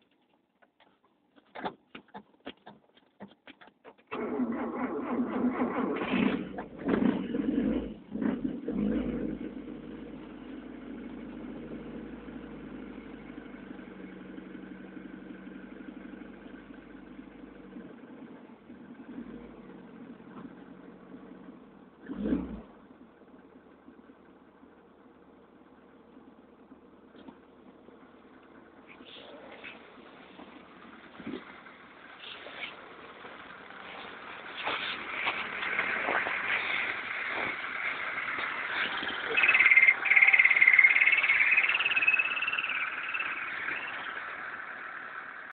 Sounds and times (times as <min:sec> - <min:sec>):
Outside, urban or manmade: 0:00.0 - 0:45.5
Chirp, tweet: 0:39.3 - 0:44.2.